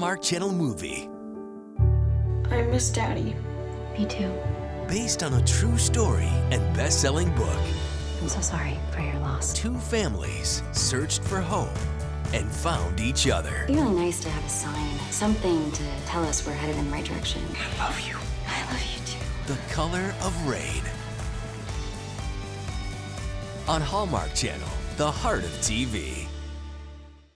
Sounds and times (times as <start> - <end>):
Speech: 0.0 - 1.1, 2.5 - 3.4, 4.0 - 20.9, 23.7 - 26.3
Music: 0.0 - 27.3.